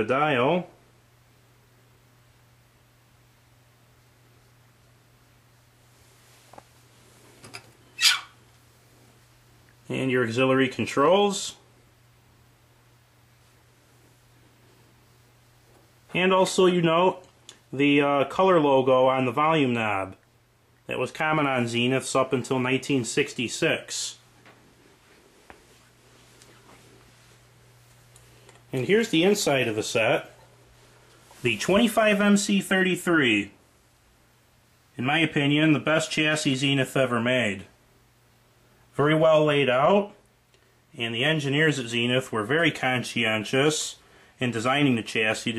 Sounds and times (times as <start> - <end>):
Speech: 0.0 - 0.8, 9.8 - 11.7, 16.1 - 20.2, 20.9 - 24.2, 28.7 - 30.4, 31.4 - 33.6, 34.9 - 37.8, 38.9 - 40.2, 40.9 - 45.5.